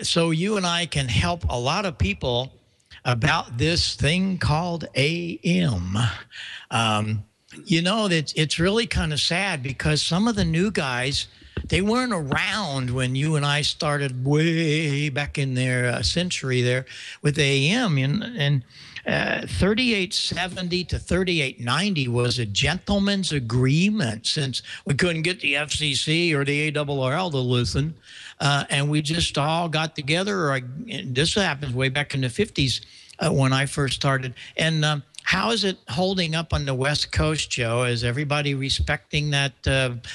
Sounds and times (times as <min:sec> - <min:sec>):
Speech: 0:00.0 - 0:40.1.